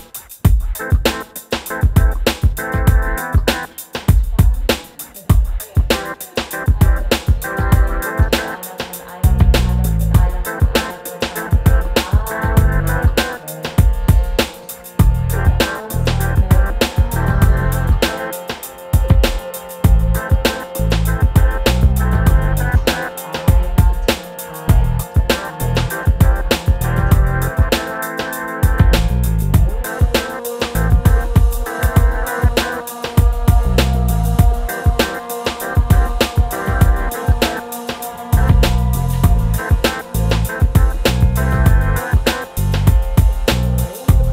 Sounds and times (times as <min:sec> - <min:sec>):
Music: 0:00.0 - 0:44.3.